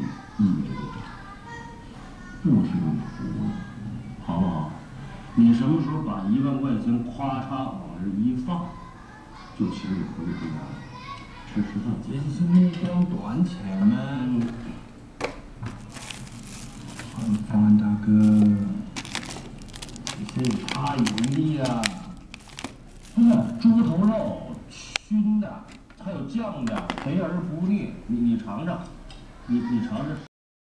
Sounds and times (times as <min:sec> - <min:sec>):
Speech: 0:00.0 - 0:14.8, 0:17.1 - 0:18.9, 0:20.1 - 0:22.2, 0:23.2 - 0:30.3.